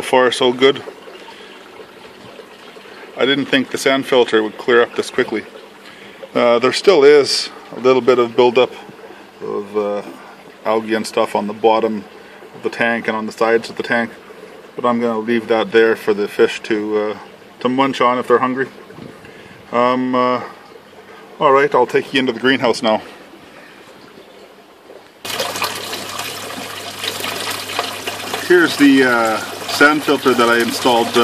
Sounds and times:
Pump (liquid): 0.0s - 31.2s
Water: 0.0s - 31.2s.

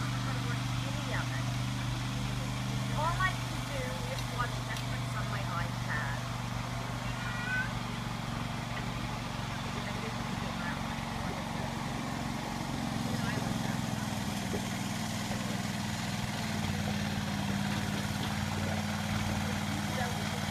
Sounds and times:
Motorboat, speedboat: 0.0s - 20.5s.

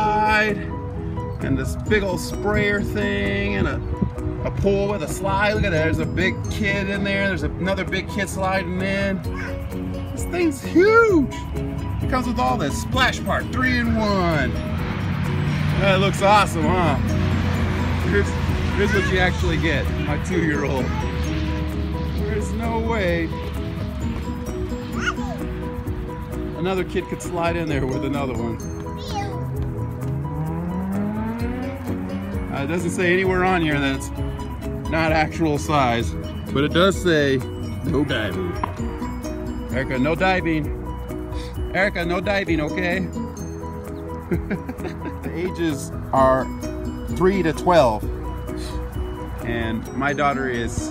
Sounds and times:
Music: 0.0s - 50.9s.

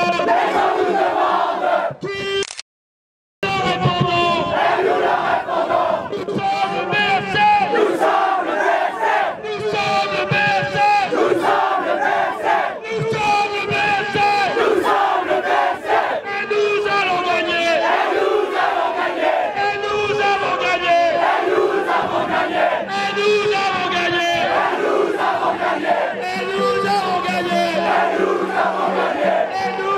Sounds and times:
Battle cry: 0.0s - 2.0s, 3.7s - 16.3s, 17.4s - 29.9s
Crowd: 0.0s - 2.5s, 3.4s - 29.9s.

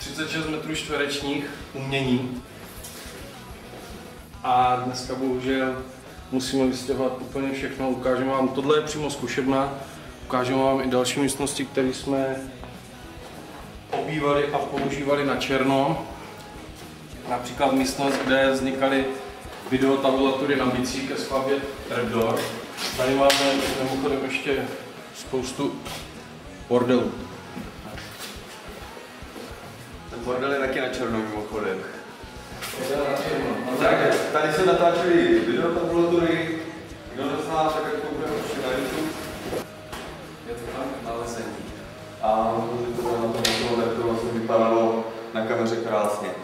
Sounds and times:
Inside, large room or hall: 0.0s - 46.4s
Music: 0.0s - 46.4s
Speech: 4.4s - 12.5s, 13.9s - 16.1s, 17.2s - 25.8s, 30.1s - 32.0s, 32.8s - 39.2s, 40.5s - 46.4s.

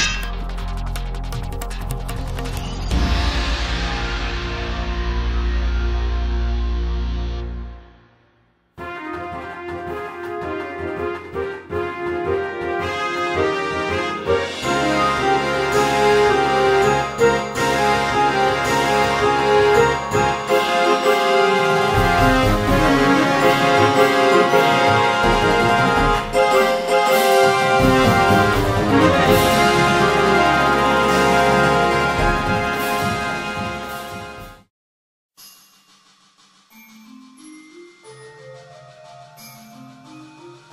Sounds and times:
Soundtrack music: 0.0s - 34.7s.

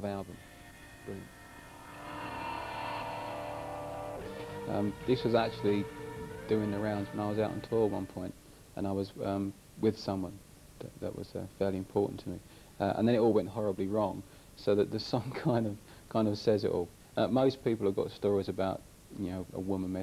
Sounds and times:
Speech: 0.0s - 0.4s, 1.1s - 1.3s, 4.7s - 5.8s, 6.5s - 20.0s
Music: 0.0s - 8.3s.

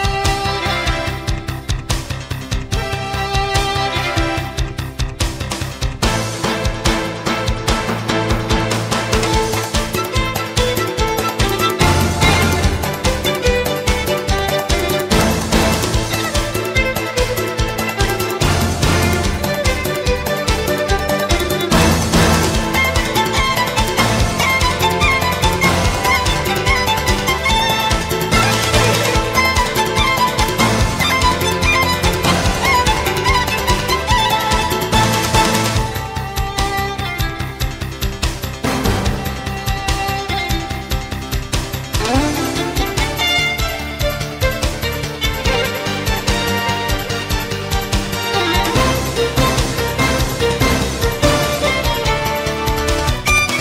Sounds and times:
Exciting music: 0.0s - 53.6s.

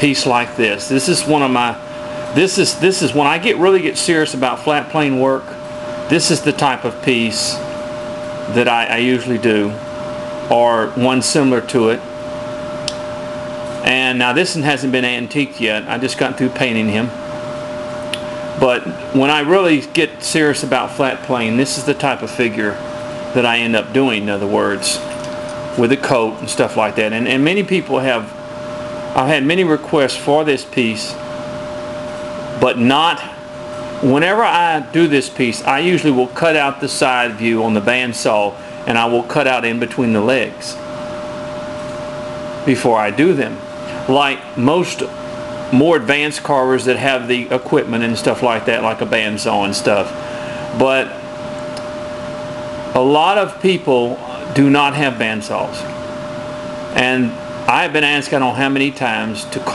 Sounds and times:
Speech: 0.0s - 1.8s, 2.4s - 7.7s, 8.5s - 9.8s, 10.5s - 12.1s, 13.8s - 17.2s, 18.6s - 22.8s, 23.4s - 25.2s, 25.8s - 28.4s, 29.2s - 31.2s, 32.6s - 33.4s, 34.0s - 40.8s, 42.6s - 50.2s, 50.8s - 51.2s, 53.0s - 55.9s, 57.0s - 59.7s.

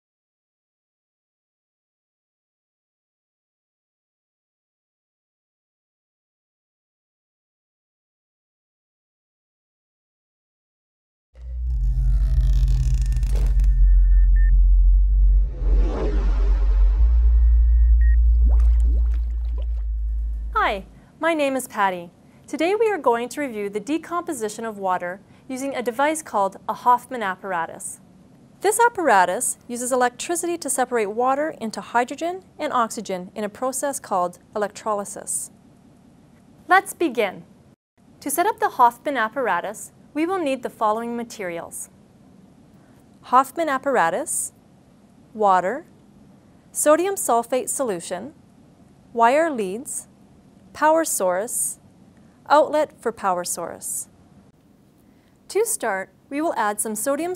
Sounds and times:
Water: 18.3s - 20.4s.

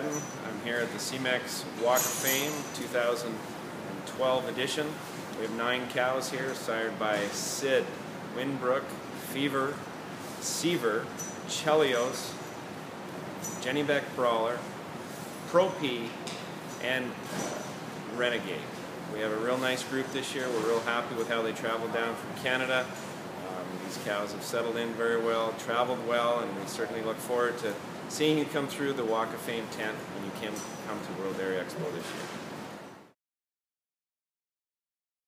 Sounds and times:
Speech: 0.0s - 9.8s, 10.4s - 12.4s, 13.6s - 14.7s, 15.5s - 16.2s, 16.8s - 32.3s.

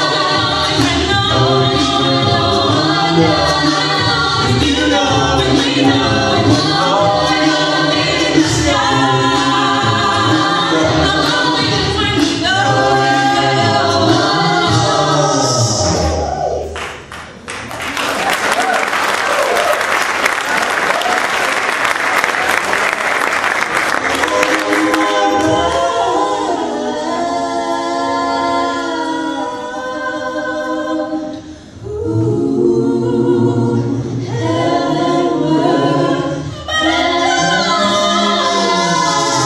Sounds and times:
A capella: 0.0s - 16.8s, 23.8s - 39.4s
Choir: 0.0s - 16.8s, 23.7s - 39.4s.

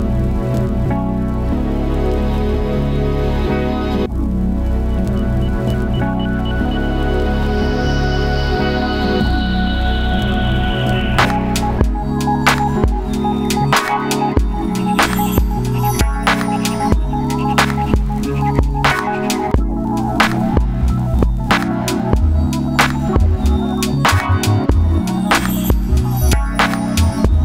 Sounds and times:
Music: 0.0s - 27.4s.

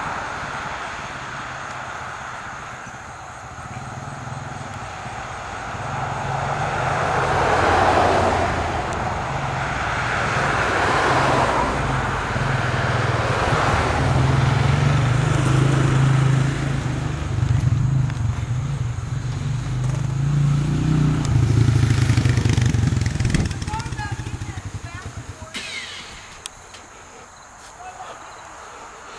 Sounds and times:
Motor vehicle (road): 0.0s - 29.1s.

